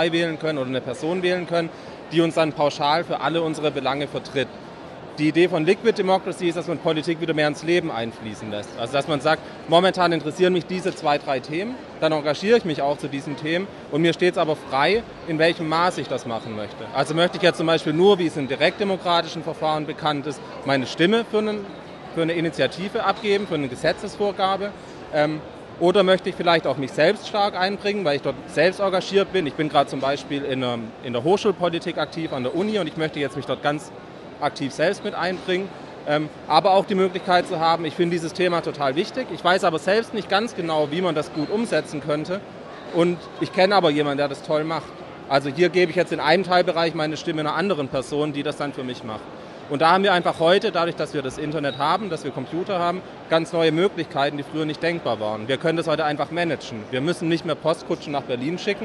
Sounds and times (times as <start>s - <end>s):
Speech: 0.0s - 4.5s, 5.2s - 58.8s.